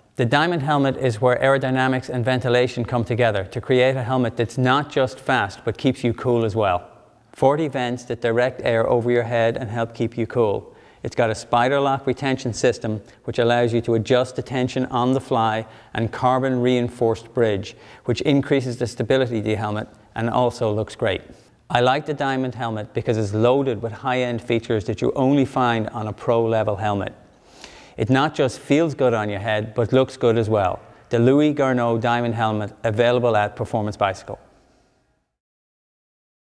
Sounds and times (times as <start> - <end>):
Speech: 0.2 - 27.2, 28.0 - 34.5.